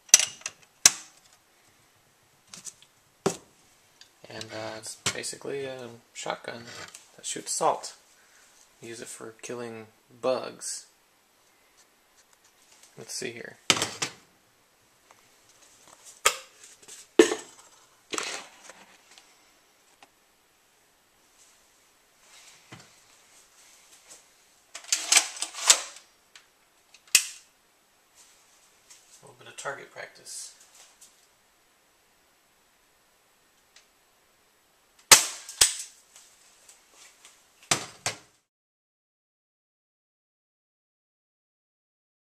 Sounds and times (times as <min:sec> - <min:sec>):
Speech: 0:04.2 - 0:08.0, 0:08.8 - 0:11.0, 0:13.0 - 0:13.7, 0:29.2 - 0:30.6
Cap gun: 0:35.1 - 0:35.9.